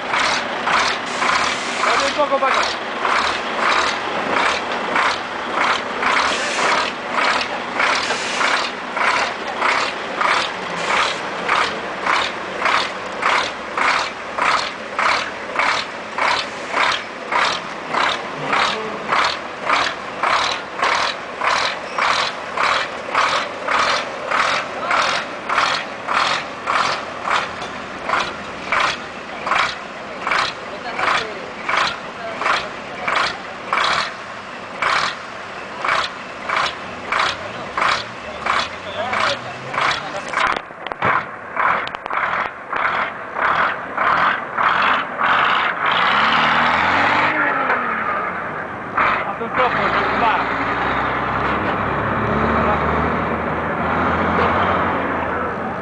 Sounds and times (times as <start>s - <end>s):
Truck: 0.0s - 55.8s.